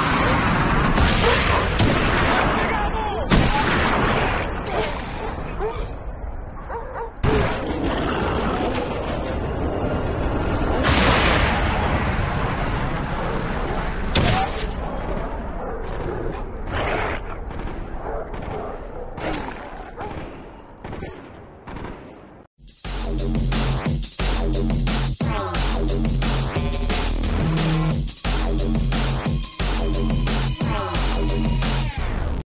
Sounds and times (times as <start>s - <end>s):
Music: 22.6s - 32.4s.